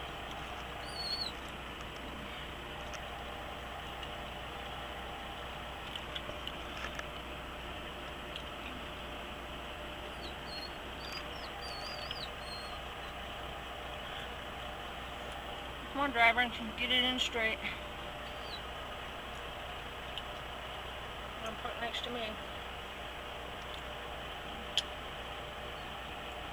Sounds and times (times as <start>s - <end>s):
Vehicle: 0.0s - 26.5s.